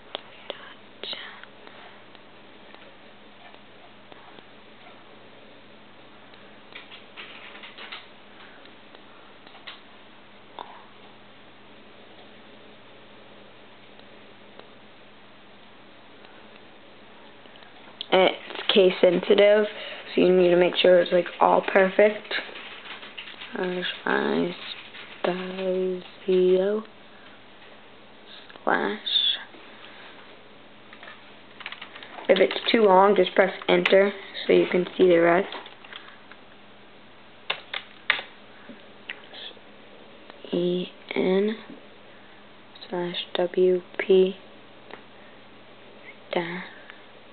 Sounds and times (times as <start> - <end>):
Inside, small room: 0.0 - 47.3
Speech: 18.0 - 22.5, 23.5 - 26.9, 28.6 - 29.5, 32.3 - 35.6, 40.4 - 41.8, 42.8 - 44.4, 46.3 - 46.8.